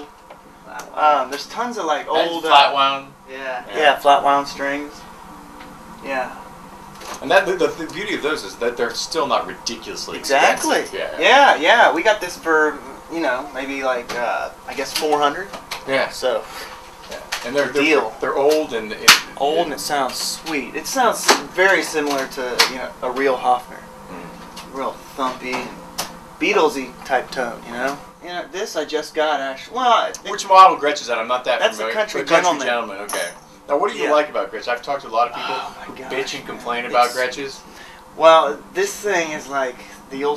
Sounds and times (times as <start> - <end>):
Speech: 0.7 - 5.0, 6.0 - 6.4, 7.2 - 25.8, 26.4 - 37.6, 38.2 - 40.3.